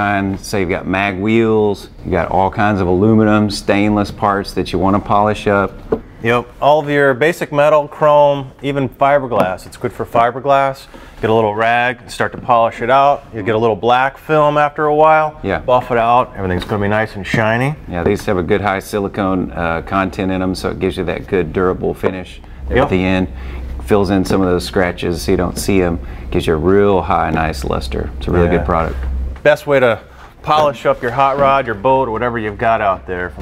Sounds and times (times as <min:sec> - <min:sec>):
Speech: 0:00.0 - 0:33.4.